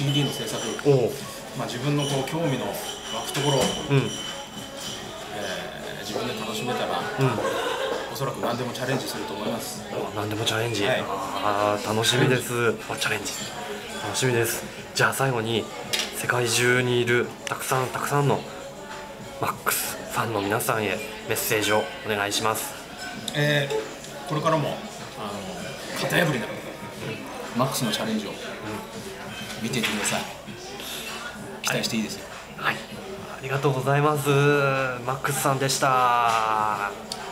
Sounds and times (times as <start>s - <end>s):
Music: 0.0s - 37.3s.